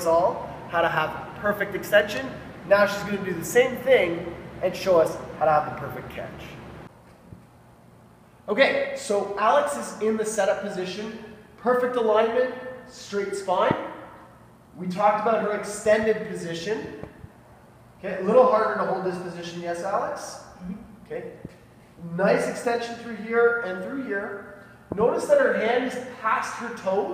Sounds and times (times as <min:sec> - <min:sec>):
Speech: 0:00.0 - 0:06.6, 0:08.5 - 0:14.0, 0:14.8 - 0:17.0, 0:18.0 - 0:27.1.